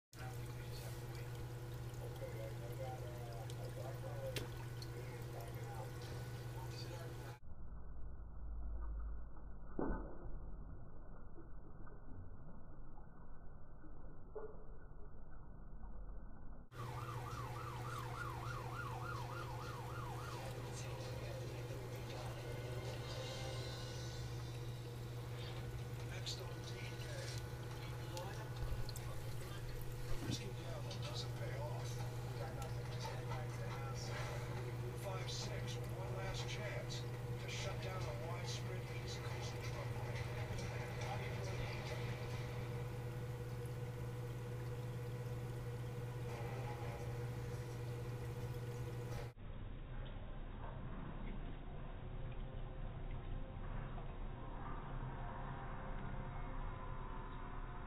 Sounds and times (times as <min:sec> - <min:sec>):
Speech: 0:00.2 - 0:07.4, 0:20.5 - 0:22.4, 0:26.1 - 0:42.1
Silence: 0:07.4 - 0:20.3, 0:49.1 - 0:57.8.